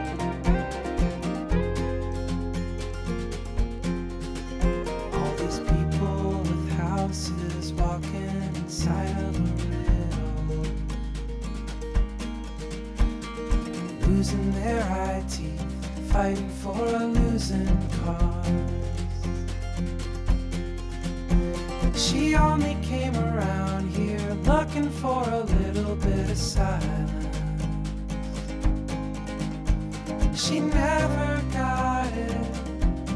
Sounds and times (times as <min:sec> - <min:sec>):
Rhythm and blues: 0:00.0 - 0:33.1.